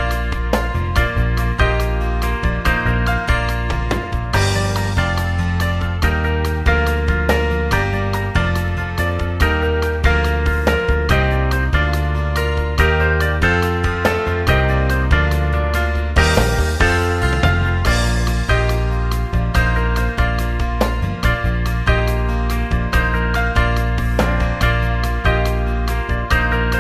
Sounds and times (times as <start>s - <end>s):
Music: 0.0s - 26.8s.